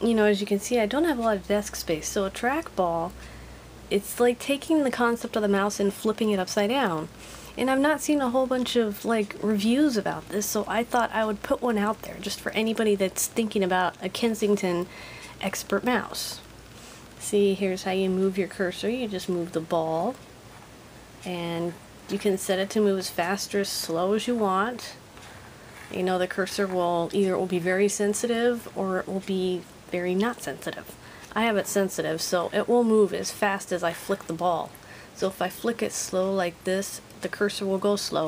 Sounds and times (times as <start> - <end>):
Speech: 0.0 - 3.2, 3.9 - 16.5, 17.2 - 20.2, 21.2 - 25.0, 25.8 - 38.2.